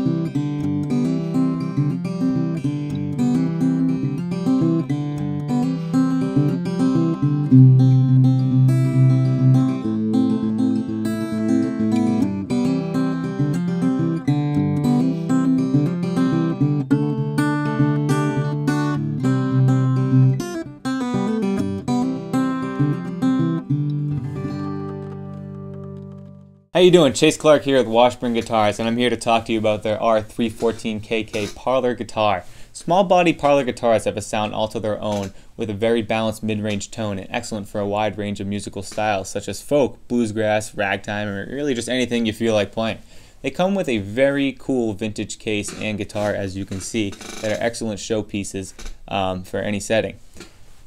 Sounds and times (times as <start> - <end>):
Speech: 26.8 - 50.2.